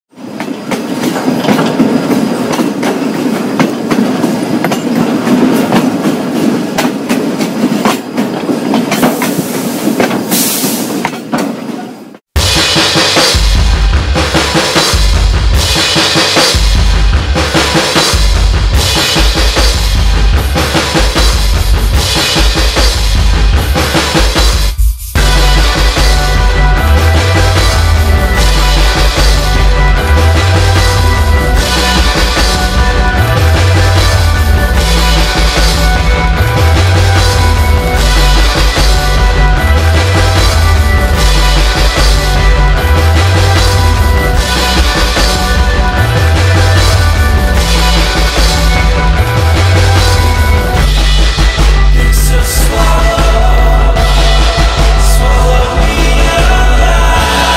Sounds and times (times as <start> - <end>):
Train: 0.1 - 57.5.